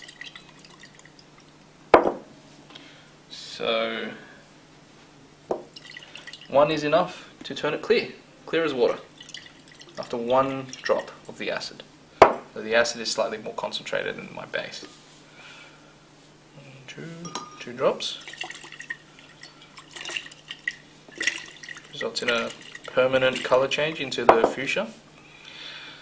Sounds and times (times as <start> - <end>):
Speech: 6.5 - 9.1, 10.0 - 11.9, 12.6 - 14.9, 16.6 - 18.2, 22.0 - 25.0
Glass: 17.2 - 20.6.